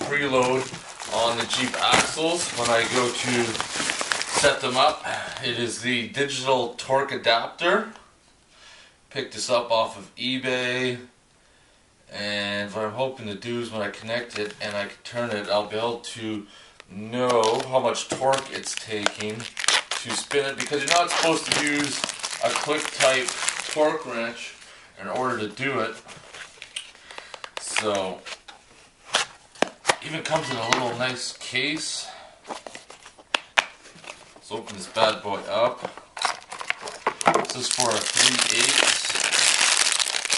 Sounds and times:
Speech: 0:00.0 - 0:03.6, 0:04.3 - 0:08.0, 0:09.1 - 0:11.2, 0:12.1 - 0:26.0, 0:27.6 - 0:28.3, 0:30.0 - 0:32.2, 0:34.4 - 0:35.9, 0:37.4 - 0:39.2
Tearing: 0:18.3 - 0:23.9, 0:36.2 - 0:40.3.

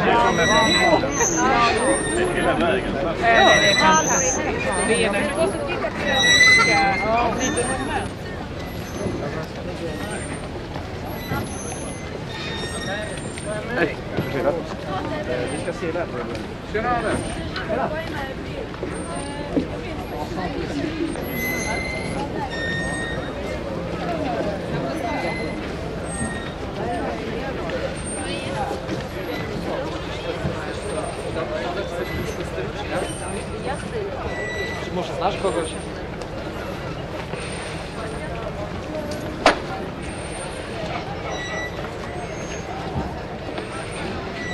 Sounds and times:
Speech: 0:00.0 - 0:44.5.

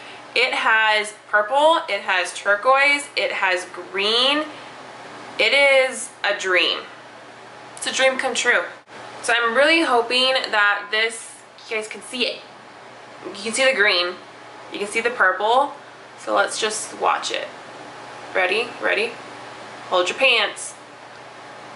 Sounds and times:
Inside, small room: 0:00.0 - 0:21.7
Speech: 0:00.4 - 0:04.5, 0:05.4 - 0:06.9, 0:07.8 - 0:12.5, 0:13.2 - 0:17.6, 0:18.3 - 0:19.2, 0:19.9 - 0:20.8.

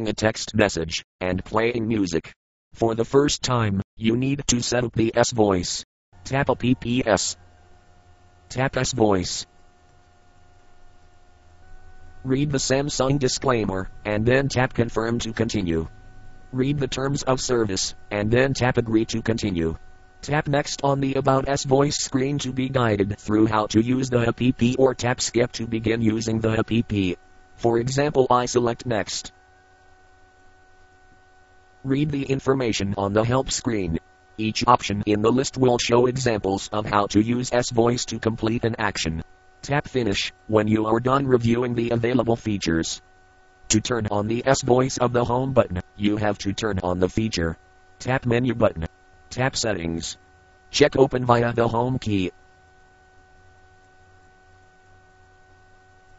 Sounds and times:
Speech synthesizer: 0:00.0 - 0:07.4, 0:31.9 - 0:43.0.

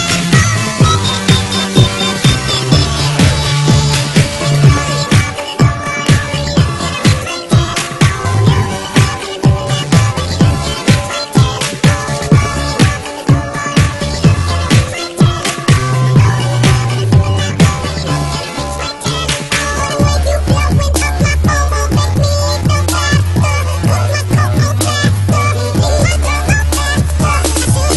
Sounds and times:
Music: 0:00.0 - 0:27.9.

